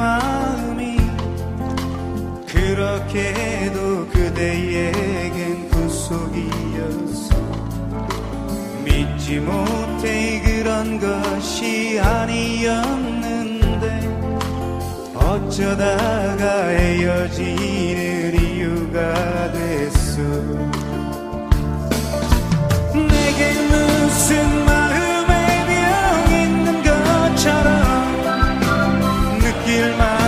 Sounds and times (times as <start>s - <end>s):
Music: 0.0s - 30.2s.